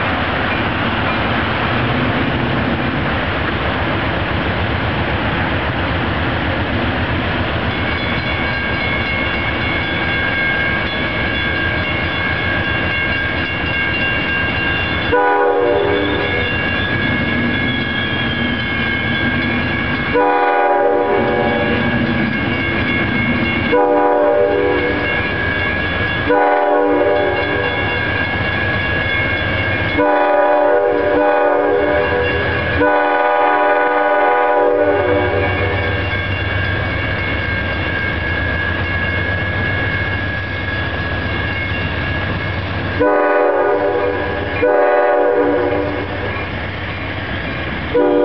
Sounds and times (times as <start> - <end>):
Railroad car, train wagon: 0.0 - 48.2
Train horn: 15.1 - 16.4, 20.1 - 21.8, 23.7 - 25.0, 26.3 - 27.7, 30.0 - 35.8, 43.0 - 46.3, 47.9 - 48.2.